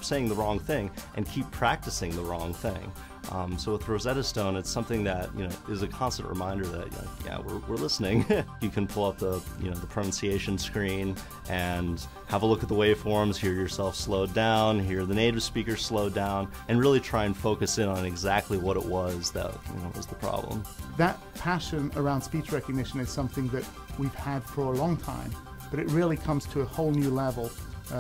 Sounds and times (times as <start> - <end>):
Male speech, man speaking: 0.0 - 28.0
Music: 0.0 - 28.0
Narration, monologue: 0.0 - 28.0.